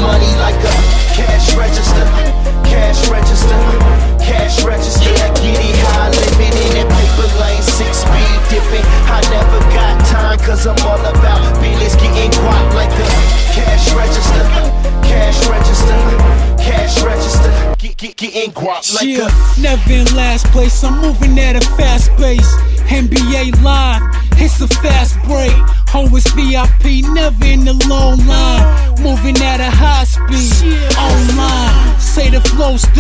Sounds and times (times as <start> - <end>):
Music: 0.0 - 33.0.